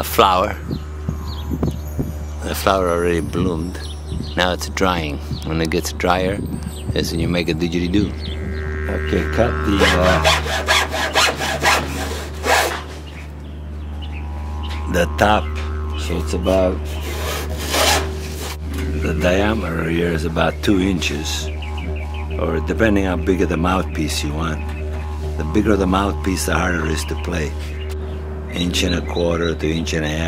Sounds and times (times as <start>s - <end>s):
Speech: 0.0s - 0.6s, 2.4s - 3.8s, 4.4s - 8.1s, 8.9s - 10.4s, 14.9s - 16.8s, 18.8s - 21.5s, 22.4s - 24.6s, 25.4s - 27.6s, 28.5s - 30.2s
Didgeridoo: 0.0s - 30.2s.